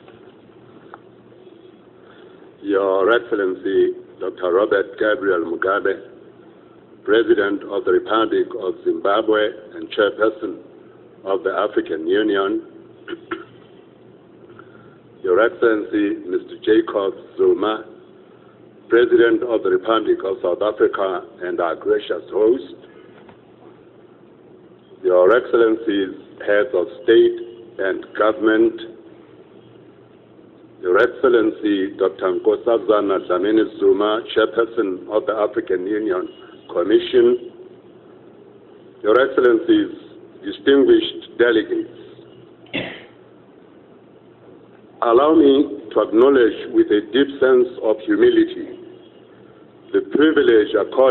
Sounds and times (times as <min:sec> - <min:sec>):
Narration, monologue: 0:00.0 - 0:51.1
Male speech, man speaking: 0:02.6 - 0:06.2, 0:07.1 - 0:10.7, 0:11.3 - 0:12.7, 0:15.2 - 0:18.0, 0:18.9 - 0:22.8, 0:25.0 - 0:29.0, 0:30.8 - 0:37.6, 0:39.0 - 0:42.2, 0:45.0 - 0:48.9, 0:49.9 - 0:51.1.